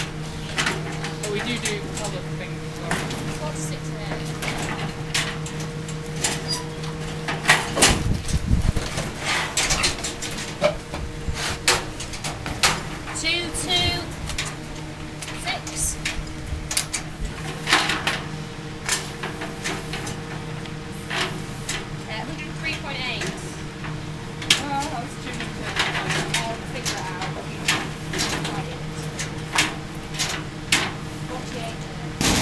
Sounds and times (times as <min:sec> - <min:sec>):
Speech: 0:01.1 - 0:04.4, 0:13.2 - 0:14.1, 0:15.4 - 0:16.0, 0:22.1 - 0:23.6, 0:24.6 - 0:27.4, 0:28.4 - 0:29.2, 0:31.3 - 0:32.2.